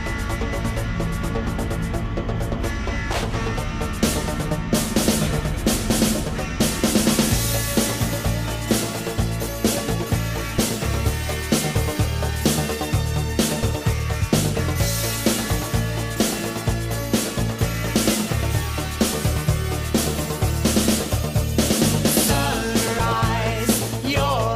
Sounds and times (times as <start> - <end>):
Music: 0.0 - 24.5.